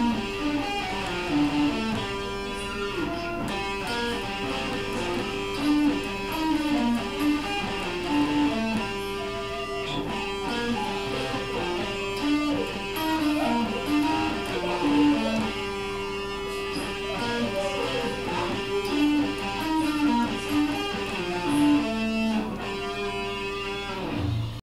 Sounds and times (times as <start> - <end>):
Music: 0.0 - 24.6
Speech: 2.4 - 5.4, 10.7 - 15.6, 16.6 - 22.1.